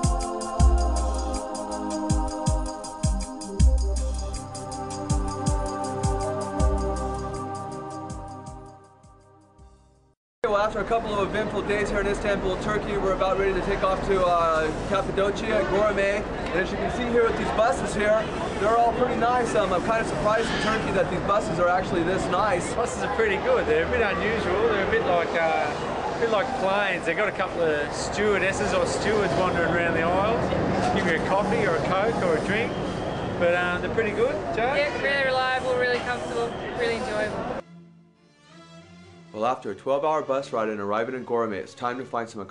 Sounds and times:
Speech: 0:10.4 - 0:32.8, 0:39.4 - 0:42.5.

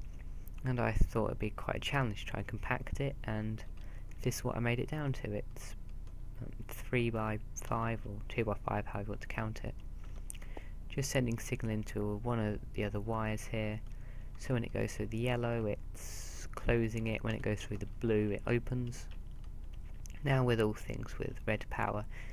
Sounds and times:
Speech: 0:00.6 - 0:05.8, 0:06.4 - 0:09.8, 0:10.9 - 0:19.1, 0:20.1 - 0:22.1.

